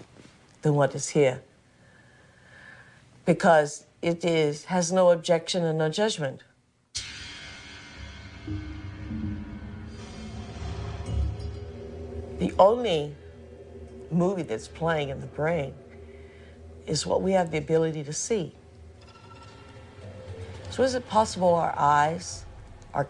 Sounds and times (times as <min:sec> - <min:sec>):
Female speech, woman speaking: 0:00.6 - 0:01.5, 0:03.3 - 0:06.5, 0:12.4 - 0:13.2, 0:14.1 - 0:15.8, 0:16.8 - 0:18.6, 0:20.7 - 0:22.4.